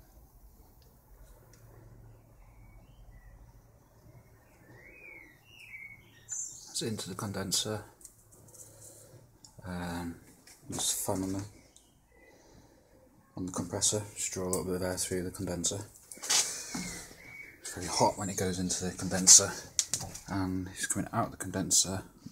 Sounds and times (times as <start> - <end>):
Speech: 6.7 - 8.0, 9.6 - 11.6, 13.4 - 15.9, 17.6 - 19.7, 20.3 - 22.1.